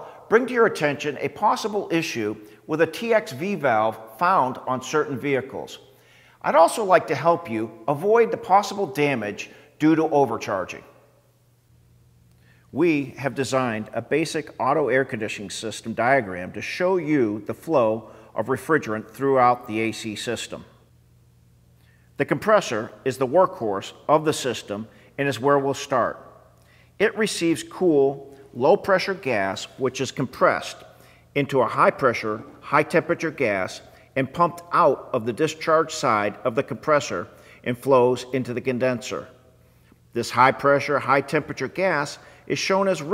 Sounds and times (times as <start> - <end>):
Speech: 0.0 - 5.8, 6.4 - 10.9, 12.7 - 20.7, 22.2 - 26.2, 27.0 - 39.4, 40.2 - 43.1.